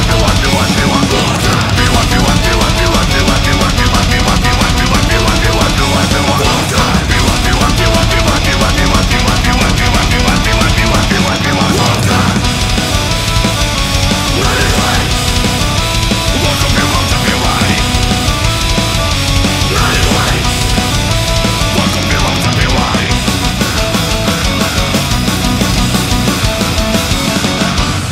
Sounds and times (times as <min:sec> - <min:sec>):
Theme music: 0:00.0 - 0:28.1.